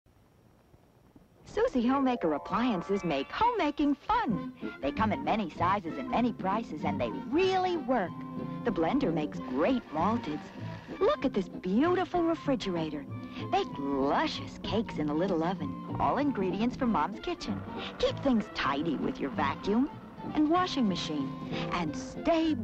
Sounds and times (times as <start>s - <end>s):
Television: 0.1s - 22.6s.